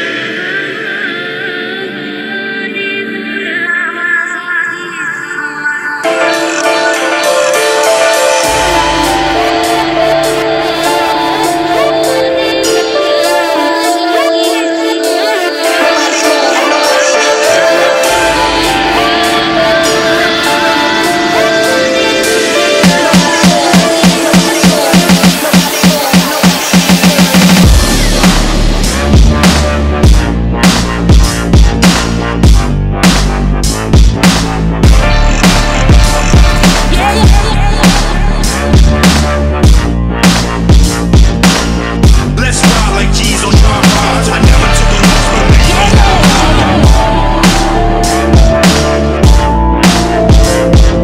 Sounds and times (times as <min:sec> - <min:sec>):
Music: 0:00.0 - 0:51.0.